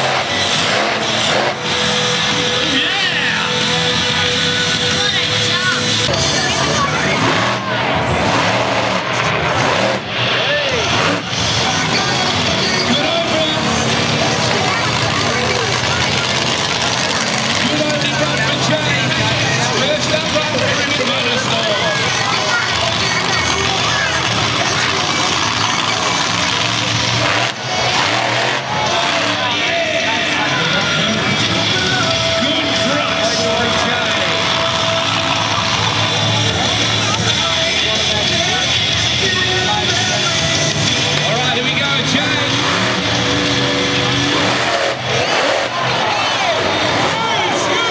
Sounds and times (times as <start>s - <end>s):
Vehicle: 0.0s - 47.9s
Music: 1.2s - 7.6s, 28.0s - 44.6s
Speech: 2.4s - 8.5s, 9.2s - 43.1s, 44.0s - 47.9s.